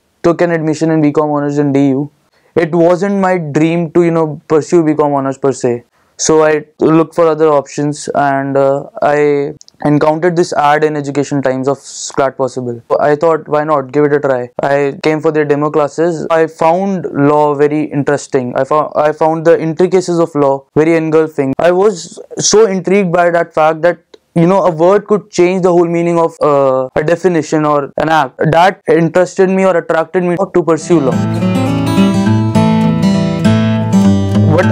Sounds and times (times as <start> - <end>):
Speech: 0.2 - 31.2, 34.5 - 34.7.